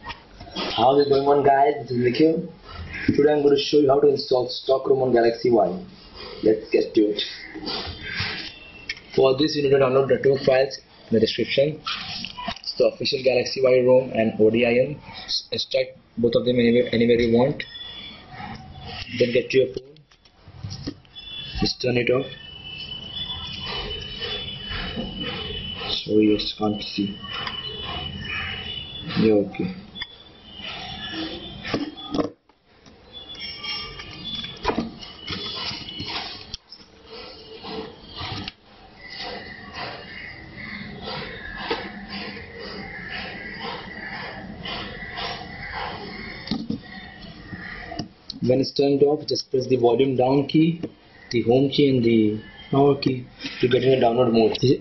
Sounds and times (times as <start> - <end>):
Speech: 0.8 - 2.5, 3.1 - 7.4, 9.2 - 11.8, 12.7 - 17.6, 19.1 - 20.0, 21.6 - 22.4, 25.9 - 27.2, 29.2 - 29.8, 48.4 - 54.8.